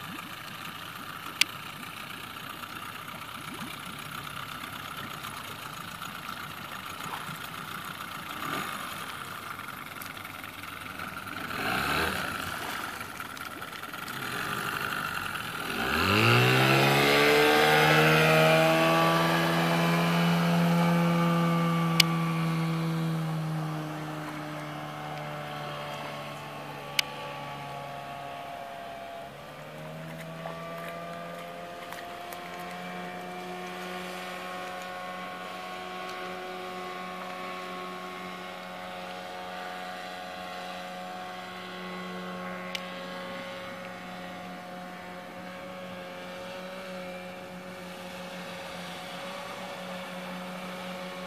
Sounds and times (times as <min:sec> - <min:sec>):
Motorboat, speedboat: 0:00.0 - 0:51.2.